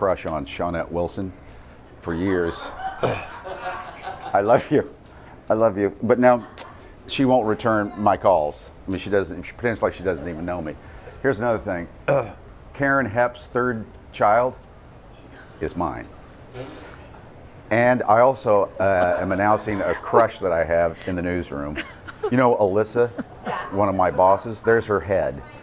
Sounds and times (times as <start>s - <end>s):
Laughter: 2.2s - 4.8s, 6.2s - 6.9s, 18.8s - 24.2s.